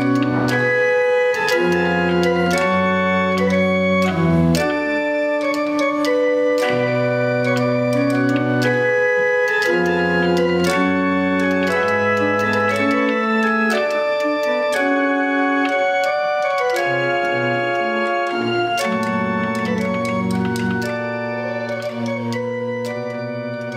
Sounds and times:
Electric piano: 0.0s - 23.7s
Electronic organ: 0.0s - 23.7s.

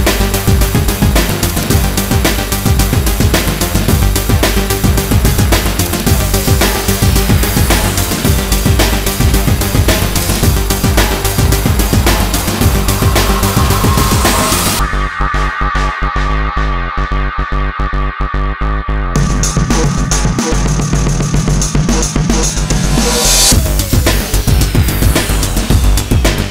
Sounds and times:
Soundtrack music: 0.0s - 26.5s.

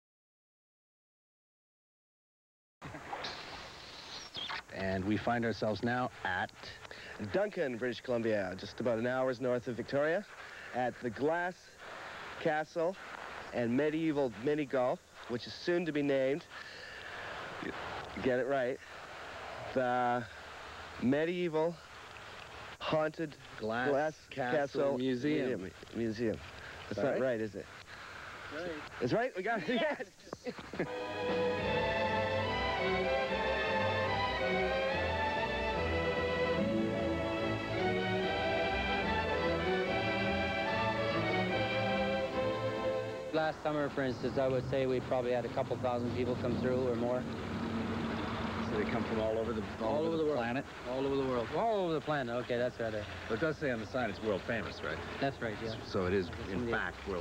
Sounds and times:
Speech: 4.8s - 11.7s, 12.4s - 16.5s, 17.6s - 18.8s, 19.8s - 20.3s, 21.0s - 21.8s, 22.8s - 27.7s, 28.6s - 30.6s, 43.3s - 47.2s, 48.6s - 57.2s
Music: 30.9s - 43.9s.

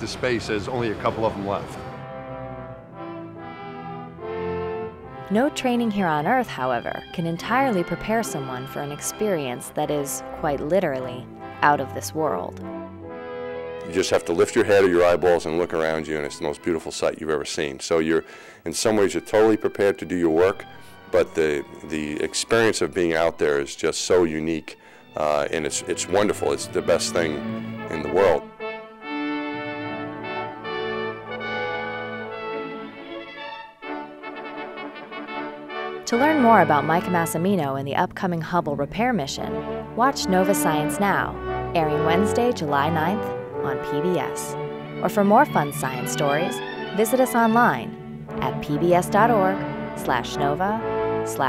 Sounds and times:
Speech: 0.0s - 1.8s, 5.3s - 12.6s, 13.9s - 20.6s, 21.2s - 28.4s, 36.1s - 51.4s
Brass instrument: 0.0s - 38.0s, 38.6s - 51.4s.

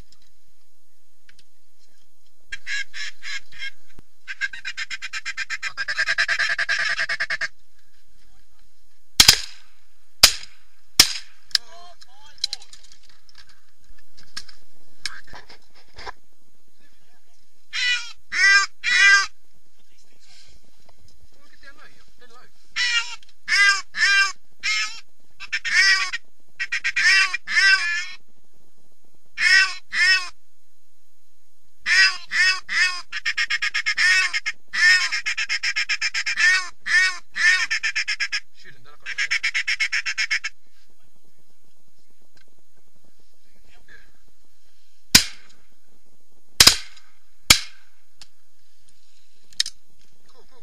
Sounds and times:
Speech: 11.6s - 12.8s, 21.4s - 22.5s, 50.2s - 50.6s.

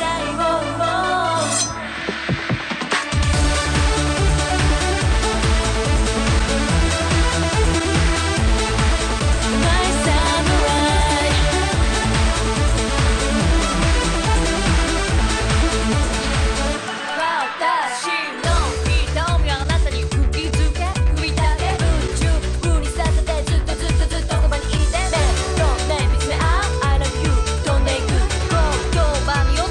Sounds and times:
Techno: 0.0s - 29.7s.

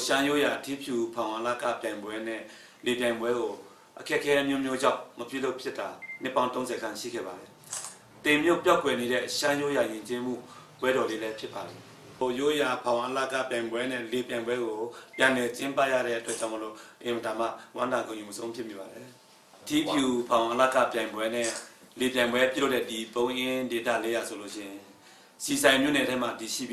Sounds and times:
Speech: 0.0s - 7.5s, 8.3s - 26.7s.

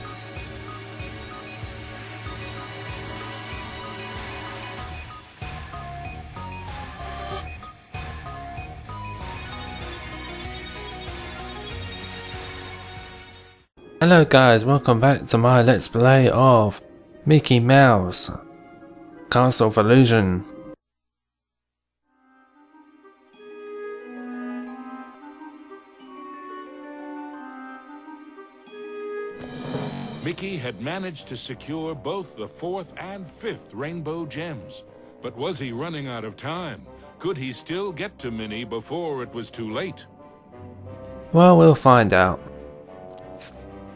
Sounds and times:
Music: 0.0s - 20.8s, 22.1s - 43.9s
Speech: 14.0s - 18.4s, 19.3s - 20.5s, 30.2s - 40.1s, 41.3s - 42.4s.

